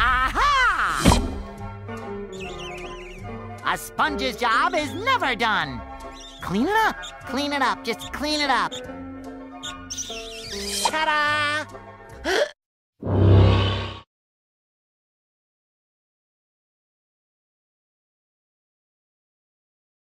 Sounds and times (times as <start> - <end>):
Music: 0.0 - 12.6.